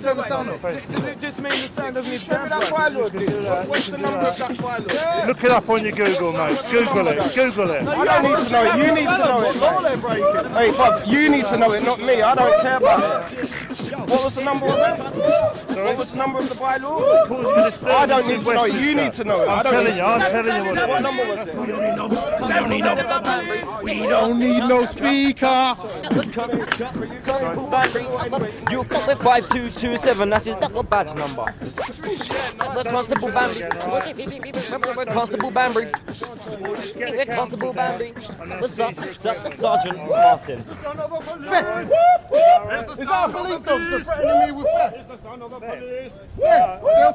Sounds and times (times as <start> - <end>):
Speech: 0.0 - 47.1.